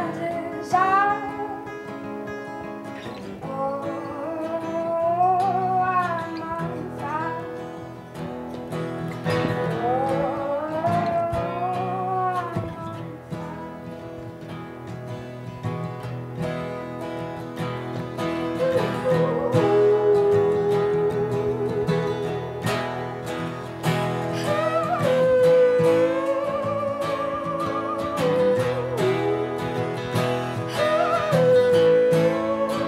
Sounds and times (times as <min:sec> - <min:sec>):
Bluegrass: 0:00.0 - 0:32.8.